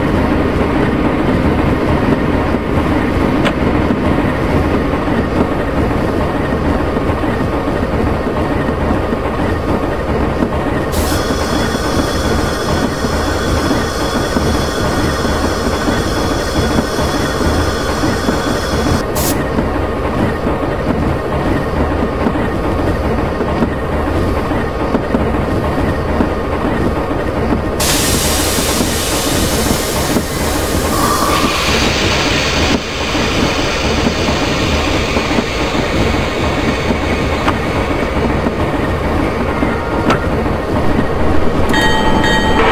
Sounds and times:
Train: 0.0 - 42.7
Steam whistle: 11.0 - 19.3, 27.8 - 37.6.

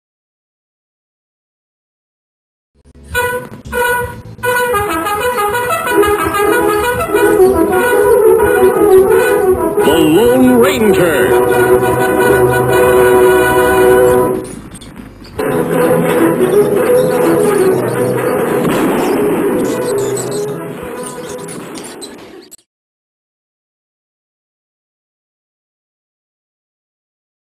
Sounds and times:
Music: 2.8 - 22.3.

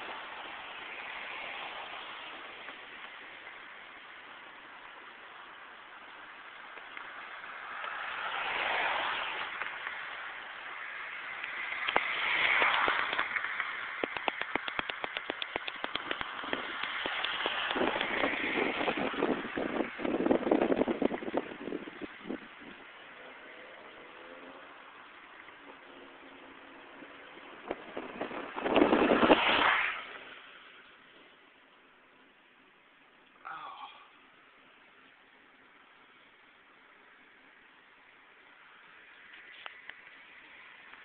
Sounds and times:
Motor vehicle (road): 0.0 - 41.0
Speech: 33.4 - 34.2.

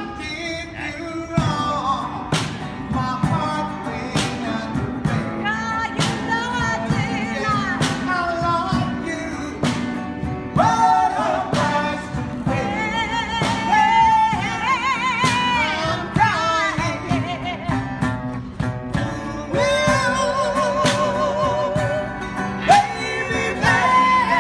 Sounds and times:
Music: 0.0 - 24.4
Singing: 10.6 - 17.8, 19.0 - 24.4.

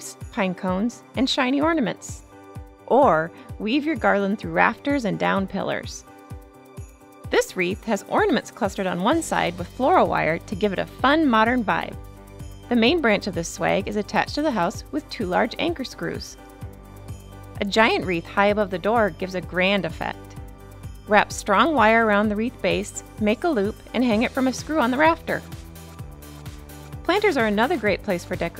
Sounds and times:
Speech: 0.0 - 2.2, 2.9 - 6.0, 7.4 - 12.0, 12.7 - 16.4, 17.6 - 20.2, 21.1 - 25.5, 27.1 - 28.5
Music: 0.0 - 28.5.

